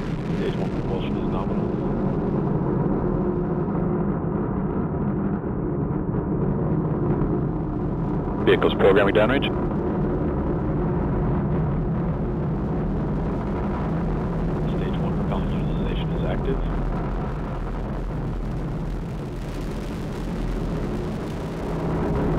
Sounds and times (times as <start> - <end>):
Speech: 0.4 - 1.6, 8.5 - 9.5, 14.7 - 16.7.